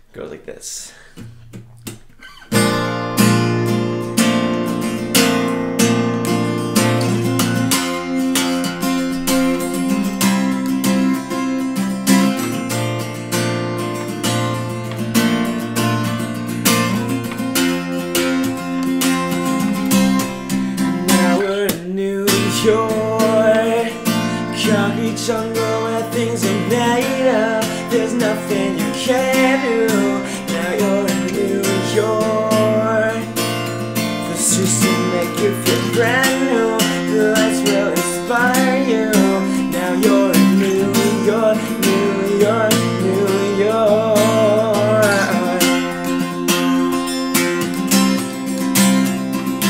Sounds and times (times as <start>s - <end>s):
Acoustic guitar: 1.0s - 49.7s.